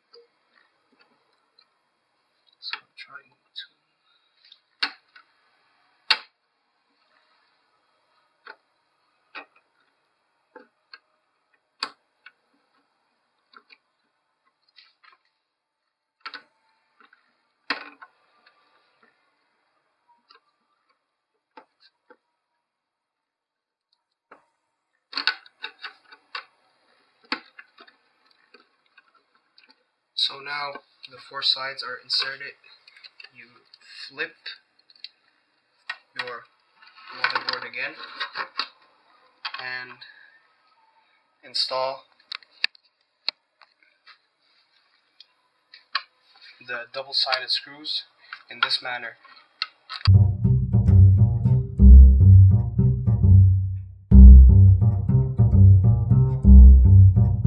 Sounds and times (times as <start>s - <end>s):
Speech: 2.6s - 3.8s, 30.2s - 34.7s, 36.2s - 38.4s, 39.0s - 42.1s, 46.3s - 49.6s.